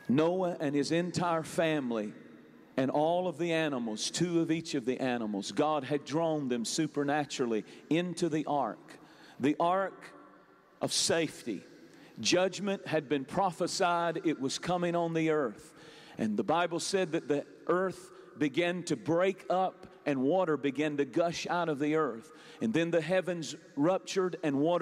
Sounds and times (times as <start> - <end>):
Speech: 0.0 - 2.2, 2.8 - 10.1, 10.8 - 24.8.